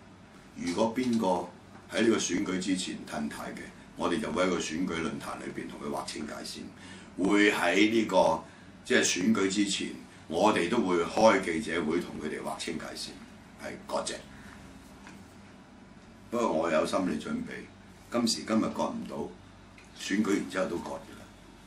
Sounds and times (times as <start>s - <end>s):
Speech: 0.6s - 14.3s, 16.3s - 21.4s.